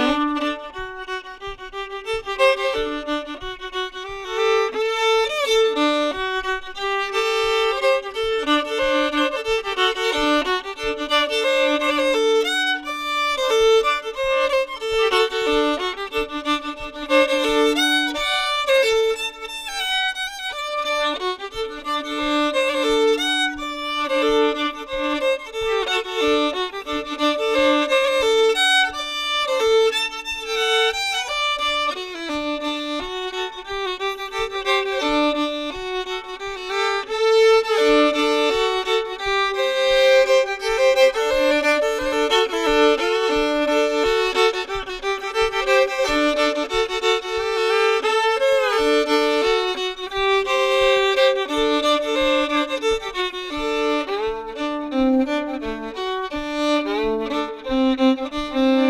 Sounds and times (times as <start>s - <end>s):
Bluegrass: 0.0s - 58.8s.